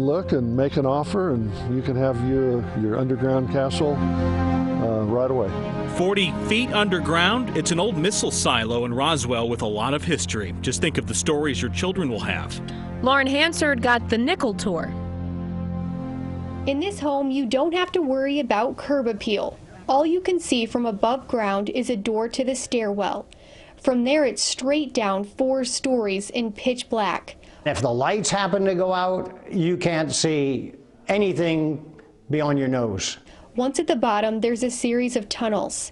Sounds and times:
Speech: 0.0 - 4.0, 4.8 - 14.9, 27.7 - 35.9.

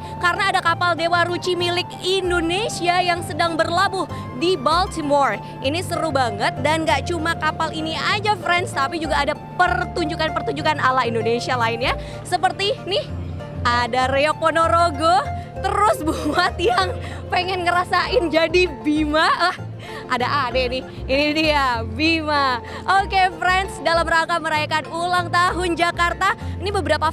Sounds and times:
Music: 0.0 - 27.1
Speech: 0.2 - 13.1, 13.7 - 27.1.

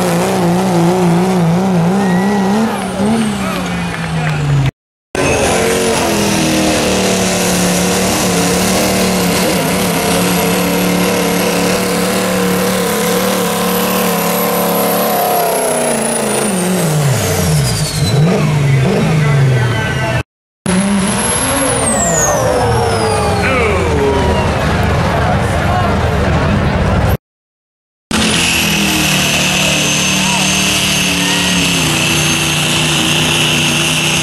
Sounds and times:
Speech: 18.4 - 20.2, 23.1 - 27.2, 30.2 - 31.6.

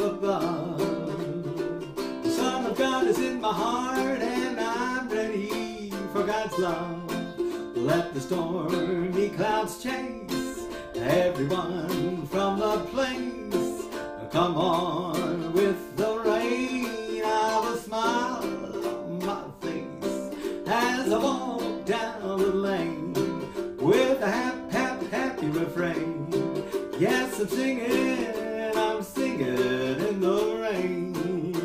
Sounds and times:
Male singing: 0.0 - 31.6
Music: 0.0 - 31.6.

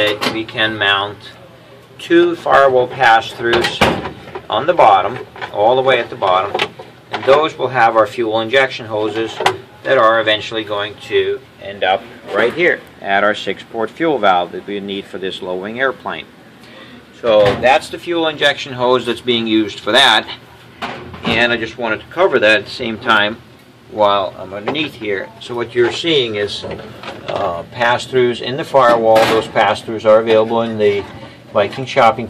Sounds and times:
Speech: 0.0 - 16.3, 17.2 - 20.4, 21.2 - 32.3.

